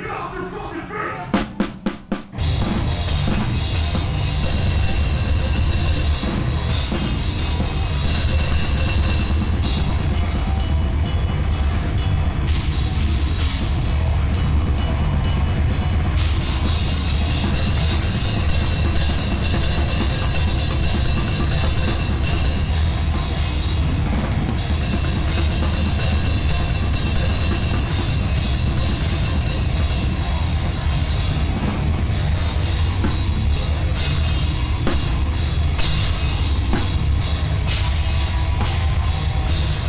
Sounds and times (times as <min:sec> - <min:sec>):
Drum kit: 0:00.0 - 0:39.8
Bass drum: 0:01.2 - 0:39.8.